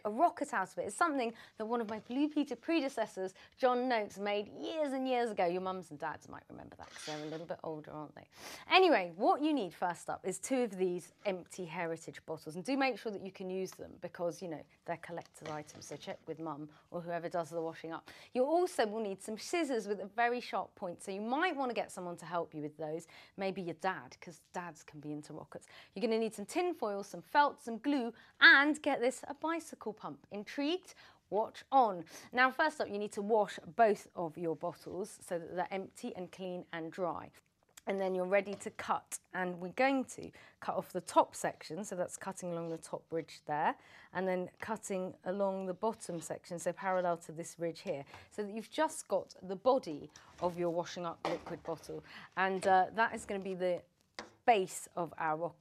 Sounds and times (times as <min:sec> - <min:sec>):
Speech: 0:00.0 - 0:53.9, 0:54.5 - 0:55.6.